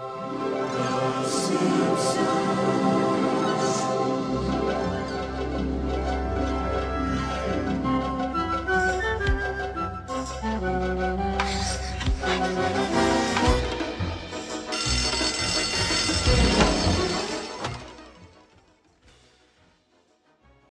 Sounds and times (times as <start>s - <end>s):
Music: 0.0s - 20.7s.